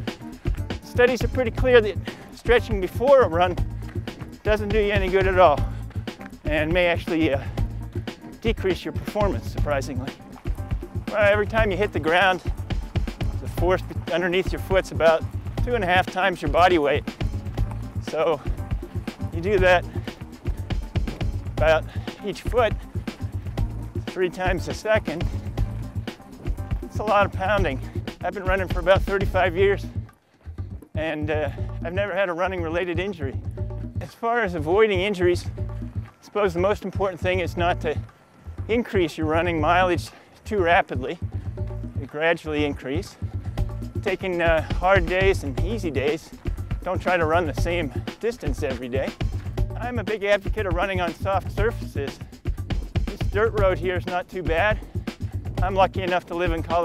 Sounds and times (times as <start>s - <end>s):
Music: 0.0s - 56.8s
Outside, rural or natural: 0.0s - 56.8s
Speech: 0.9s - 3.6s, 4.4s - 5.7s, 6.5s - 7.5s, 8.4s - 10.2s, 11.1s - 12.5s, 13.4s - 17.0s, 18.0s - 18.5s, 19.3s - 19.9s, 21.6s - 22.8s, 24.1s - 25.3s, 26.9s - 30.0s, 31.0s - 33.4s, 34.0s - 35.5s, 36.2s - 38.0s, 38.7s - 41.2s, 42.0s - 43.2s, 44.0s - 49.1s, 49.8s - 52.2s, 53.1s - 54.8s, 55.6s - 56.8s.